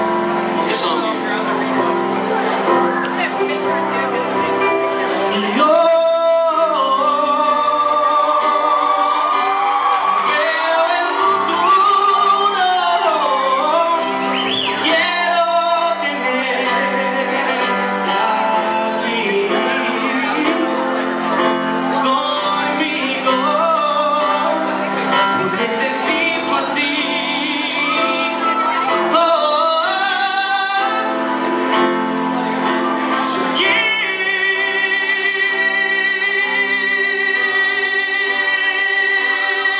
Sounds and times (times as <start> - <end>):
Music: 0.0 - 39.7
Male singing: 5.2 - 9.3, 10.2 - 31.4, 33.1 - 39.7.